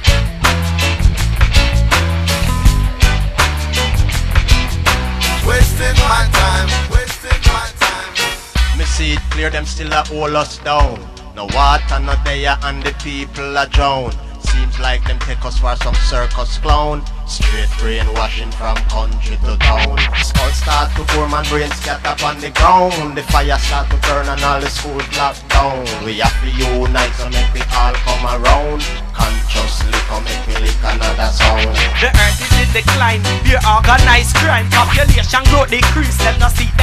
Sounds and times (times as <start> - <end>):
Music: 0.0 - 36.8
Singing: 5.4 - 36.8.